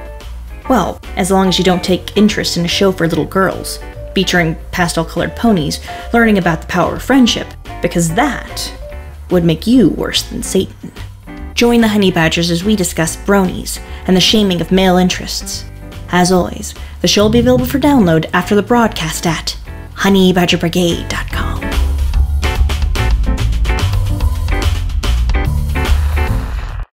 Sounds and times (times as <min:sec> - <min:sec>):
Music: 0:00.0 - 0:26.9
Speech: 0:00.7 - 0:10.8, 0:11.6 - 0:21.7.